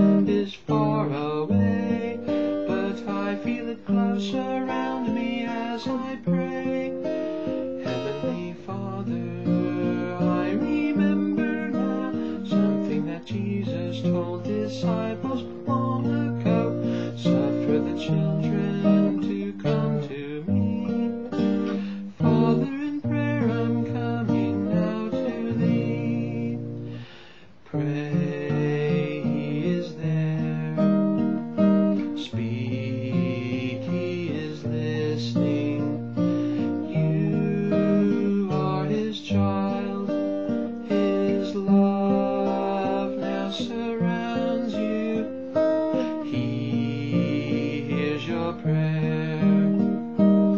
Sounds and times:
Strum: 0.0s - 50.5s.

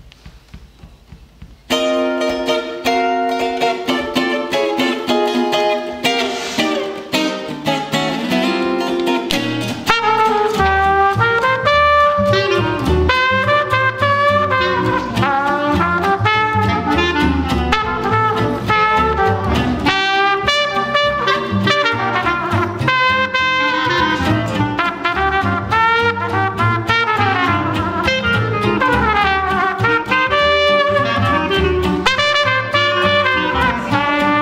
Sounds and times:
Jazz: 0.1s - 34.4s
Musical instrument: 1.7s - 34.4s.

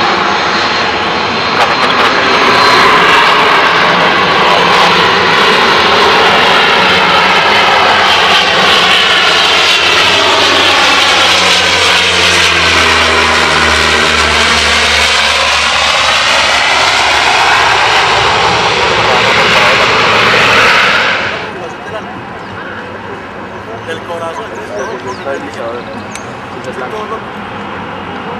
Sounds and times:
Fixed-wing aircraft, airplane: 0.0s - 28.3s.

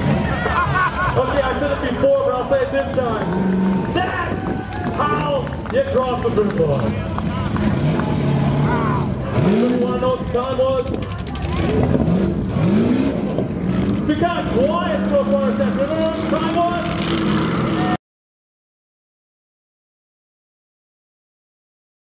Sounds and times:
Race car, auto racing: 0.0s - 18.0s.

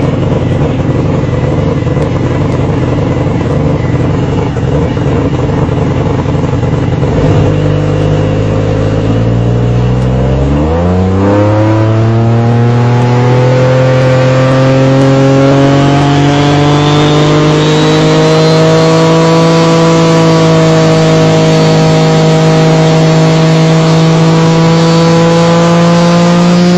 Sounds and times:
Motorboat, speedboat: 15.2s - 26.7s.

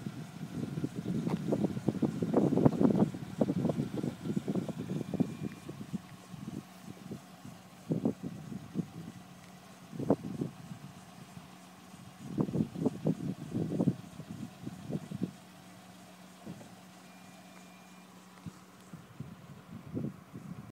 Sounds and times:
Wind noise (microphone): 0.0s - 7.2s, 7.8s - 9.2s, 9.9s - 11.3s, 12.2s - 15.4s, 18.9s - 20.7s.

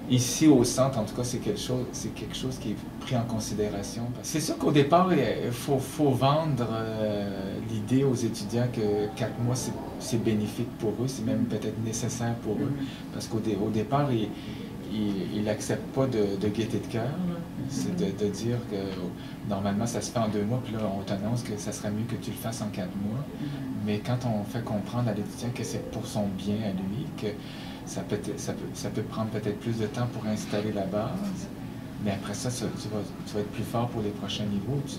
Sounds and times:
Speech: 0.1s - 34.9s.

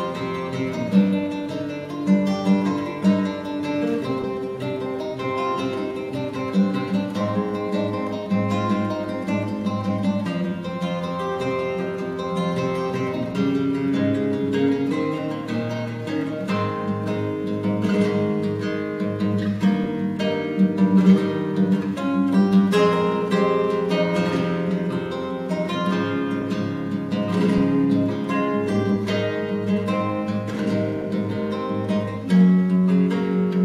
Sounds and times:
Acoustic guitar: 0.0s - 33.6s
Strum: 0.0s - 33.6s.

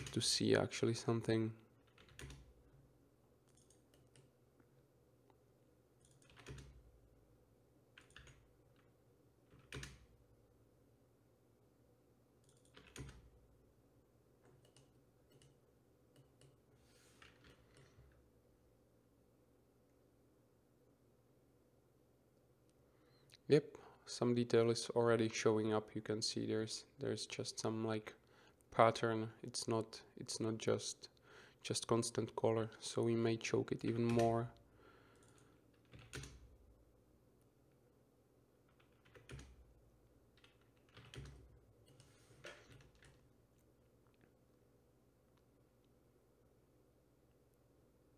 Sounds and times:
Silence: 1.5s - 24.2s, 34.5s - 48.1s.

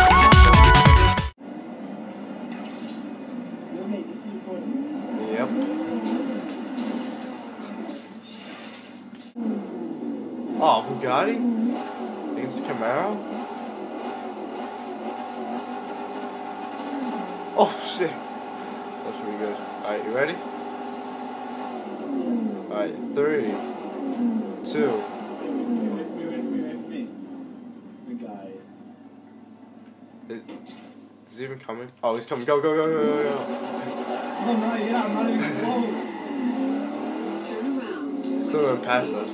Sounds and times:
Vehicle: 1.4s - 31.3s, 32.2s - 39.3s
Speech: 3.7s - 5.6s, 10.6s - 11.4s, 12.4s - 13.2s, 17.6s - 18.2s, 19.1s - 20.4s, 22.7s - 23.6s, 24.6s - 25.0s, 25.6s - 27.1s, 28.1s - 28.6s, 31.3s - 33.5s, 34.4s - 36.0s, 37.4s - 39.3s.

